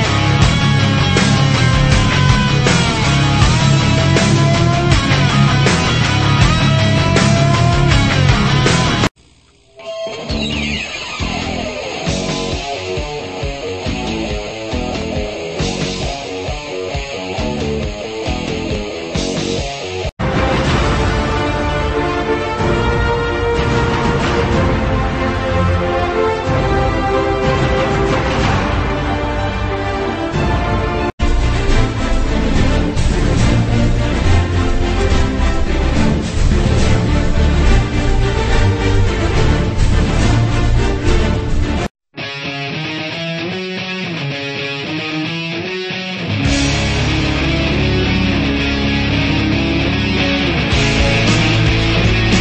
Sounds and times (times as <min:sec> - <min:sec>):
Music: 0:00.0 - 0:52.4.